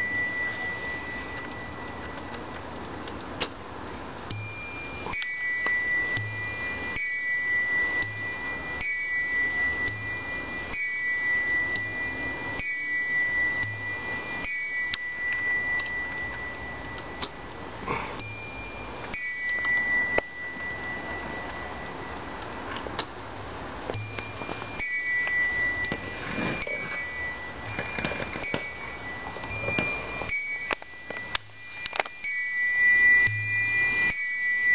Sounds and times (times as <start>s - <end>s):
Clock: 0.0s - 34.7s
Inside, small room: 0.0s - 34.7s.